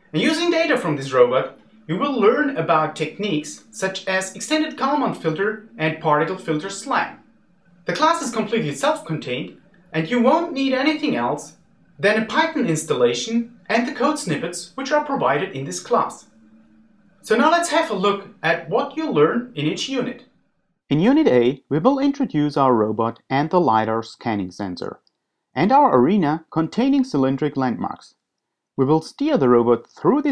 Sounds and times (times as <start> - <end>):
Speech: 0.1 - 7.2, 7.9 - 16.3, 17.3 - 20.2, 20.9 - 25.0, 25.6 - 28.2, 28.8 - 30.3.